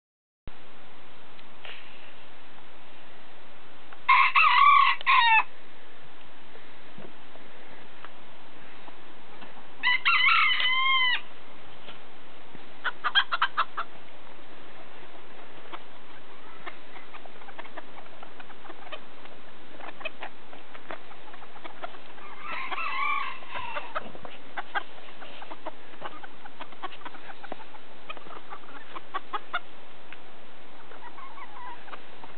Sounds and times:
Chicken, rooster: 4.1 - 5.5, 9.8 - 11.3, 12.8 - 13.9, 14.8 - 29.7, 30.8 - 32.3.

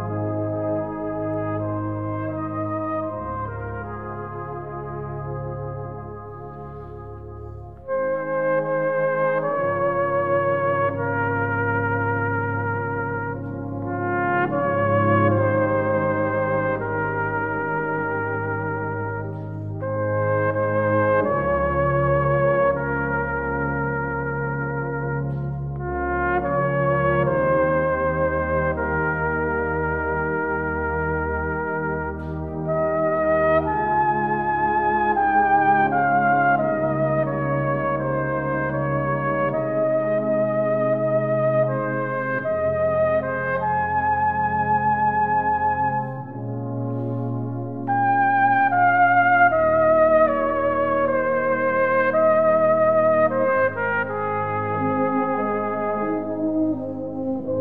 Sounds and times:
Trumpet: 0.0 - 57.6.

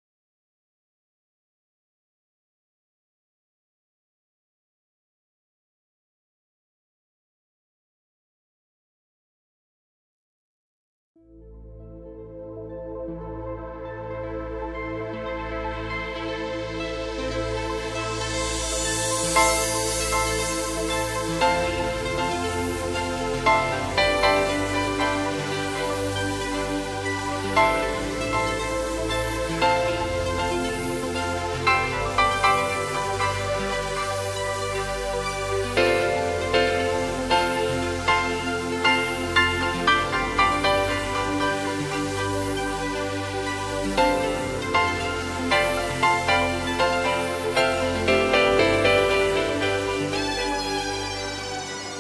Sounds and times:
Music: 11.2 - 52.0.

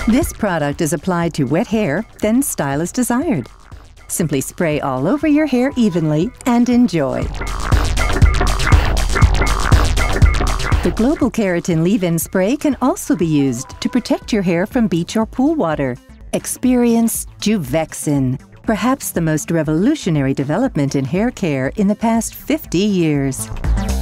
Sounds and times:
Speech: 0.0 - 3.5, 4.1 - 7.3, 10.9 - 23.5
Music: 0.0 - 24.0.

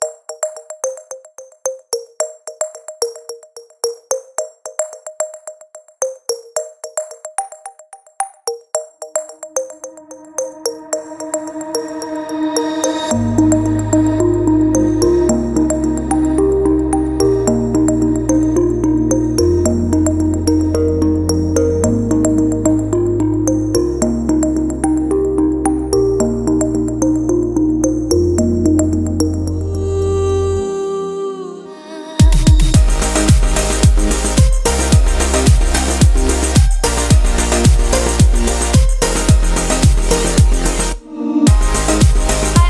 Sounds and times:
Music: 0.0 - 42.6.

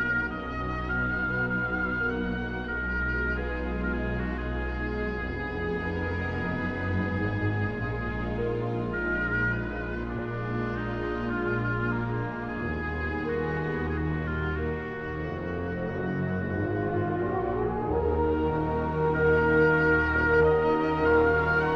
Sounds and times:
Music: 0.0 - 21.7.

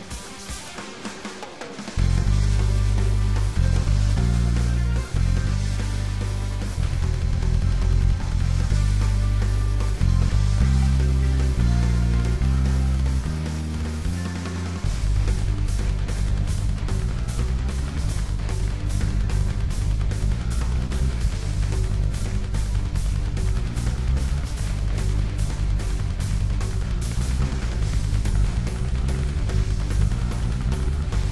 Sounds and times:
Music: 0.0 - 31.3.

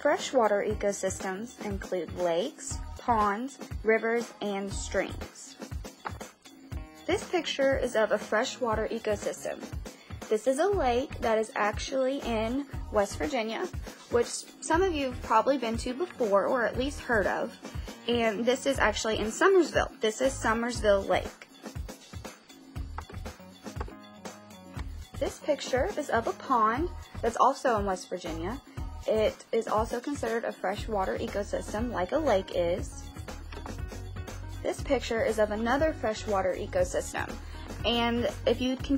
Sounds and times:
Speech: 0.0 - 5.6, 7.1 - 21.4, 25.2 - 33.0, 34.6 - 38.9
Music: 0.0 - 38.9.

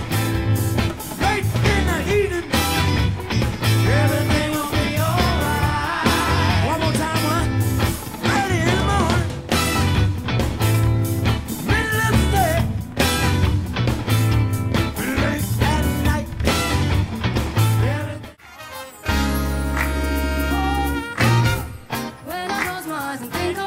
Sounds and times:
Funk: 0.0 - 18.4, 19.0 - 23.6
Musical instrument: 0.0 - 23.6
Singing: 3.8 - 7.5, 8.2 - 9.4.

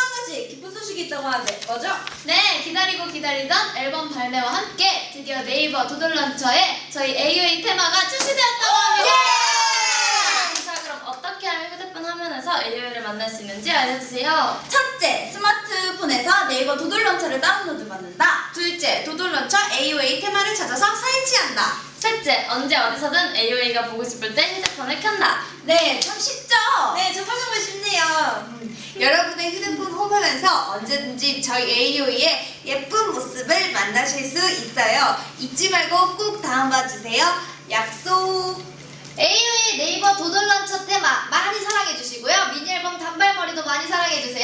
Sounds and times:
Speech: 0.0 - 9.3, 10.2 - 44.4
Inside, large room or hall: 0.0 - 44.4.

